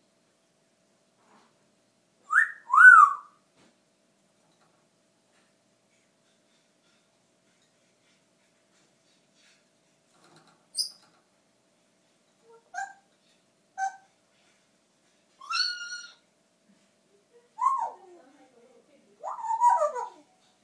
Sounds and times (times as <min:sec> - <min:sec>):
Bird: 0:02.3 - 0:03.3, 0:10.8 - 0:11.2, 0:12.5 - 0:13.1, 0:13.8 - 0:14.1, 0:15.4 - 0:16.3, 0:17.6 - 0:18.0, 0:19.2 - 0:20.3.